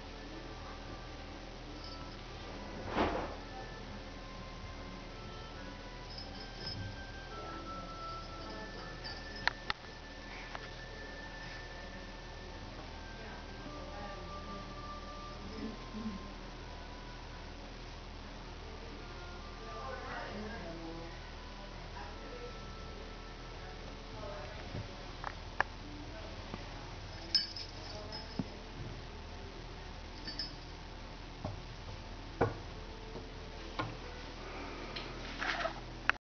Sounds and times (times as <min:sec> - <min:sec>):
Speech: 0:18.6 - 0:25.2, 0:25.8 - 0:29.0.